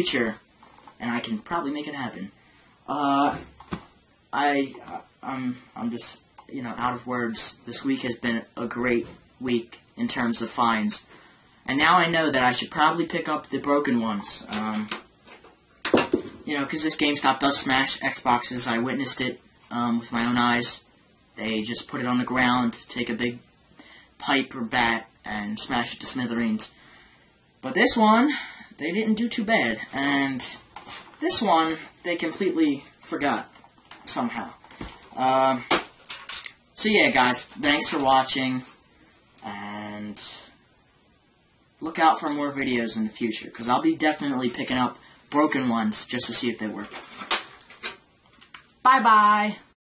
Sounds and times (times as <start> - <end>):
Speech: 0.0 - 0.4, 1.0 - 3.5, 4.3 - 11.1, 11.7 - 15.0, 16.4 - 23.5, 24.2 - 26.8, 27.6 - 30.6, 31.2 - 33.5, 34.1 - 35.7, 36.8 - 38.8, 39.4 - 40.6, 41.8 - 47.0, 48.8 - 49.8.